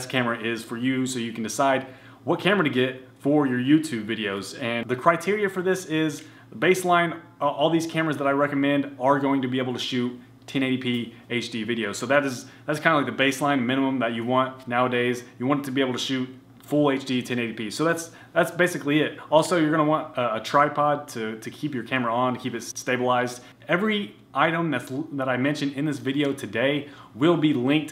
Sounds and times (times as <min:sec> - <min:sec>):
Speech: 0:00.0 - 0:27.9.